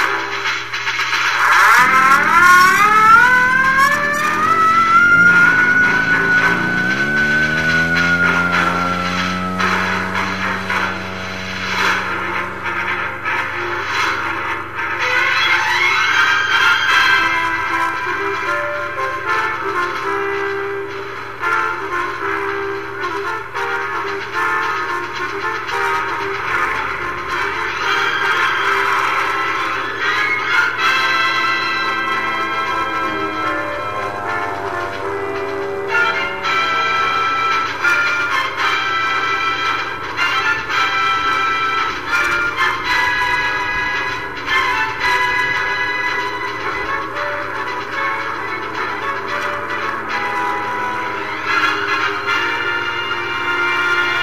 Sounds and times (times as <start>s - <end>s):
Fixed-wing aircraft, airplane: 0.0s - 54.2s
Music: 0.0s - 54.2s
Outside, rural or natural: 0.0s - 54.2s.